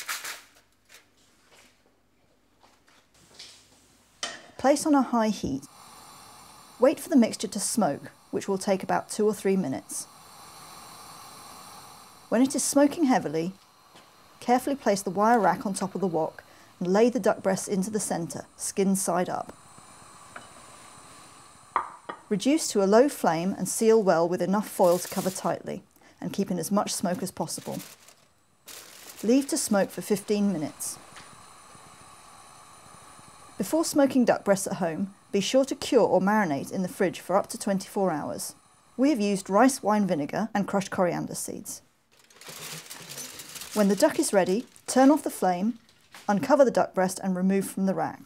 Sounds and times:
Speech: 4.6s - 5.7s, 14.4s - 19.5s, 22.3s - 27.8s, 29.2s - 31.0s, 33.6s - 41.8s, 43.8s - 48.2s.

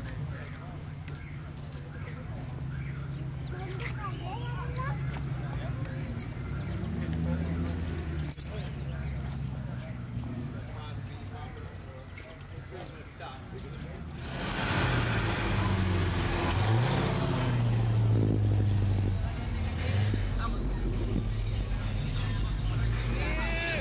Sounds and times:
Speech: 0.0s - 14.2s
Car: 0.0s - 23.8s.

